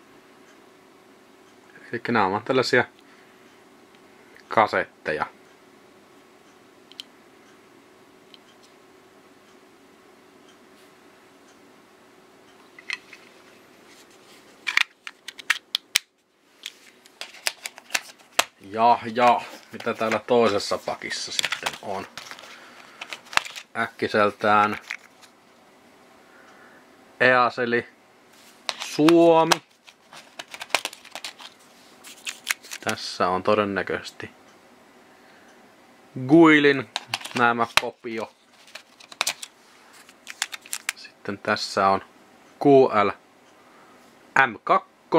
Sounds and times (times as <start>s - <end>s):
Speech: 1.7s - 3.0s, 4.5s - 5.4s, 18.6s - 22.1s, 23.8s - 24.8s, 27.2s - 28.0s, 28.9s - 29.6s, 32.8s - 34.4s, 36.2s - 38.3s, 41.0s - 43.2s, 44.4s - 45.1s.